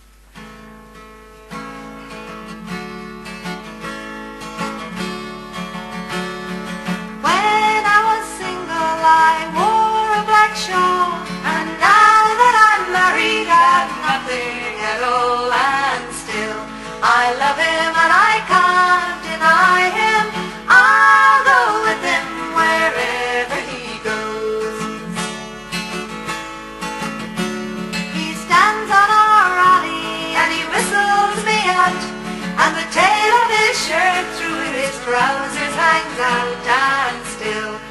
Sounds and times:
Country: 0.4 - 37.9
Singing: 7.2 - 25.2, 28.2 - 37.9.

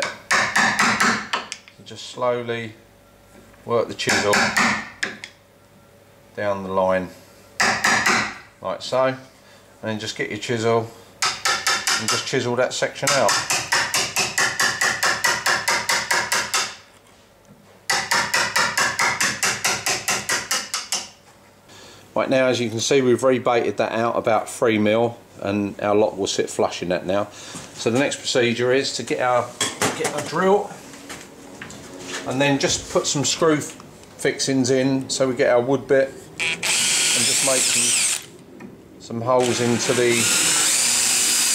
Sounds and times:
Speech: 1.8 - 2.8, 3.7 - 4.6, 6.4 - 7.2, 8.6 - 11.0, 12.0 - 13.3, 22.2 - 30.8, 32.3 - 36.2, 37.2 - 38.0, 39.0 - 40.4.

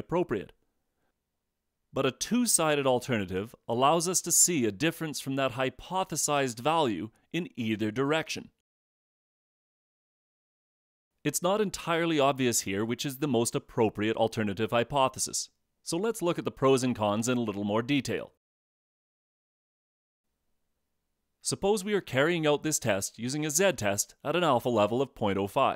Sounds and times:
Speech: 0.0 - 0.6, 2.0 - 8.6, 11.3 - 18.4, 21.4 - 25.7.

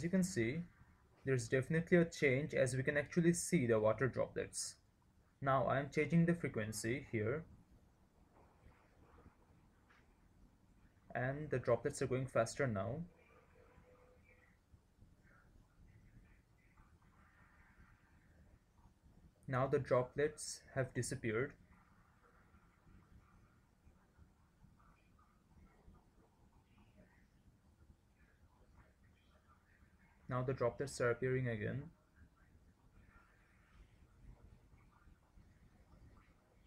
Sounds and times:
Speech: 0.0 - 4.8, 5.4 - 7.5, 11.1 - 13.1, 19.4 - 21.6, 30.2 - 32.0.

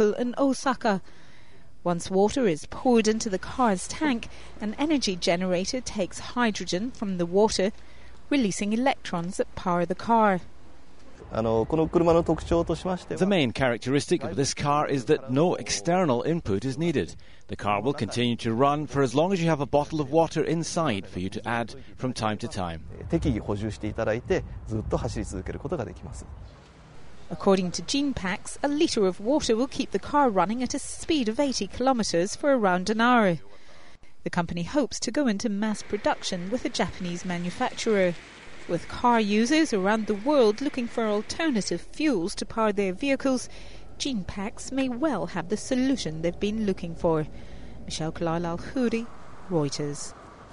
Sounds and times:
Speech: 8.3 - 10.4, 11.3 - 26.3, 27.3 - 47.3, 47.9 - 50.1.

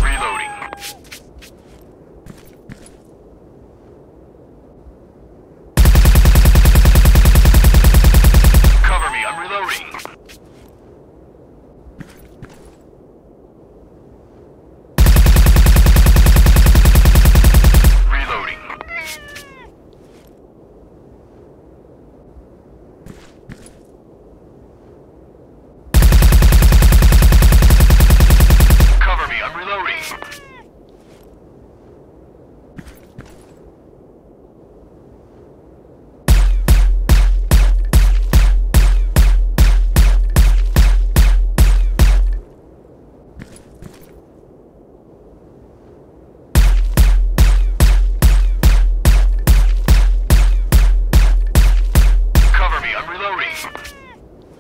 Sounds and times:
Speech: 0.0 - 0.9, 8.8 - 10.2, 18.1 - 19.2, 29.0 - 30.6, 52.5 - 54.2
Meow: 0.1 - 1.0, 18.6 - 19.7, 30.0 - 30.7, 53.5 - 54.2.

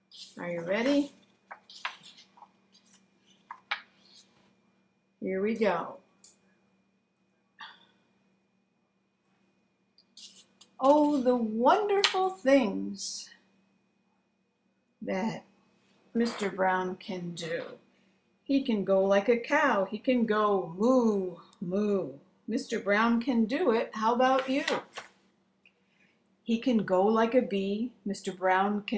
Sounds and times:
Speech: 0.2 - 1.2, 5.2 - 6.0, 10.8 - 13.4, 15.0 - 15.5, 16.2 - 17.8, 18.5 - 24.8, 26.5 - 28.9.

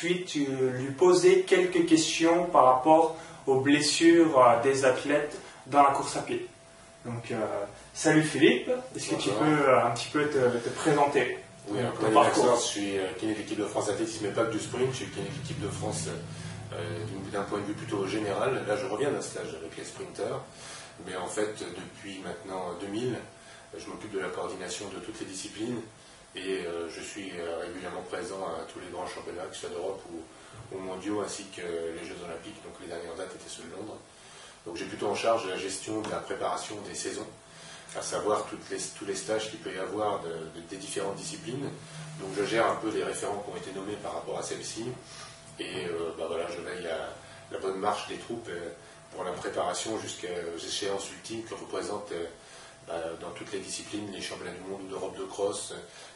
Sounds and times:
Speech: 0.0 - 55.9
Inside, small room: 0.0 - 56.1.

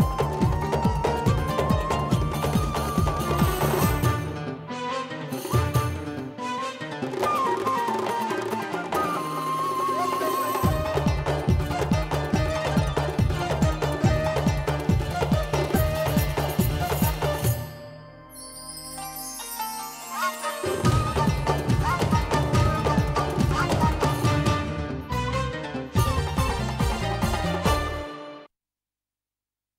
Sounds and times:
Music: 0.0 - 28.5.

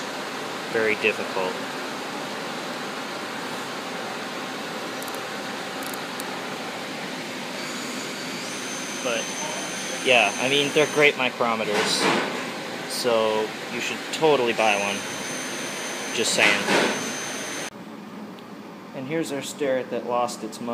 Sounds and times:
Speech: 0.7 - 1.6, 9.0 - 9.3, 10.0 - 12.2, 12.9 - 15.0, 16.2 - 16.8, 19.0 - 20.7.

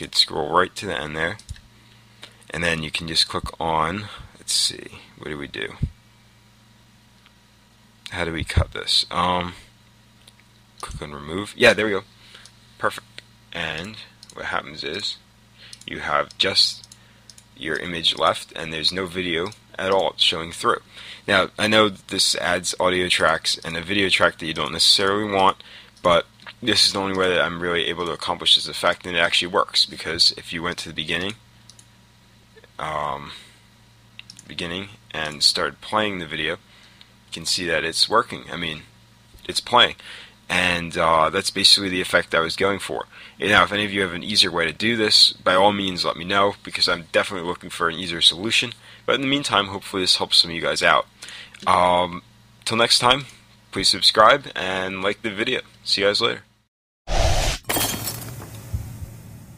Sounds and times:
Speech: 0.0 - 1.5, 2.5 - 6.0, 8.1 - 9.7, 10.8 - 12.1, 12.8 - 15.3, 15.9 - 16.9, 17.6 - 31.4, 32.6 - 33.5, 34.3 - 36.6, 37.3 - 56.5.

